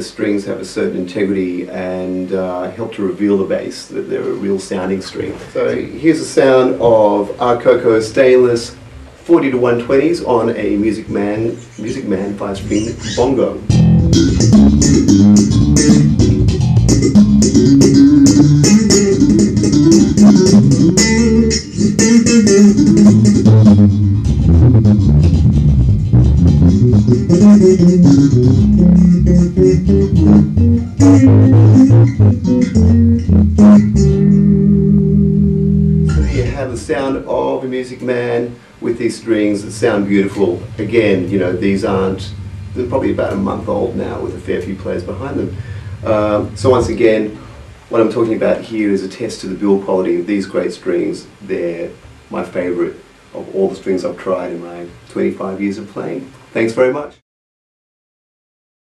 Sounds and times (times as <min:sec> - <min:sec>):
Speech: 0:00.0 - 0:13.7, 0:36.2 - 0:57.2
Bass guitar: 0:11.0 - 0:37.0, 0:39.7 - 0:47.8.